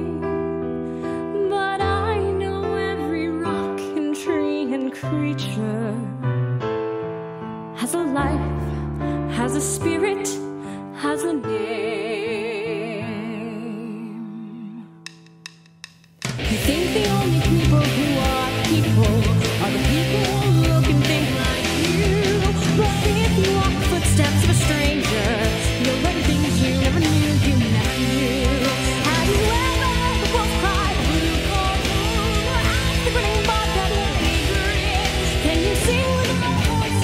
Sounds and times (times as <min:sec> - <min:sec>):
Music: 0:00.0 - 0:37.0.